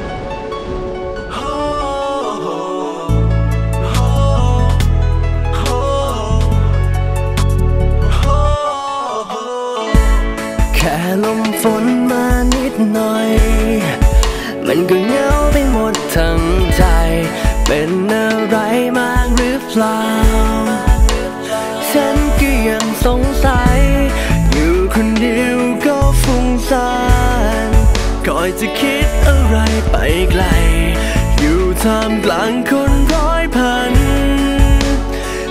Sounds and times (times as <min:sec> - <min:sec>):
Music: 0:00.0 - 0:35.5.